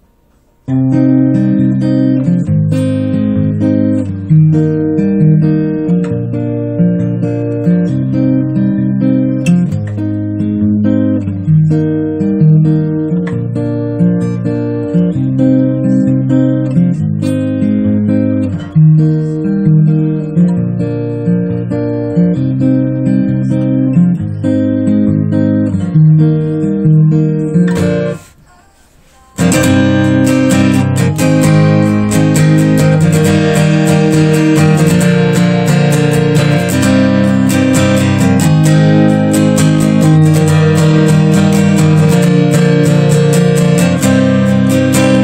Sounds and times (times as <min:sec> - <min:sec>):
Strum: 0:00.0 - 0:45.2
Bass guitar: 0:00.7 - 0:28.2, 0:29.4 - 0:45.2.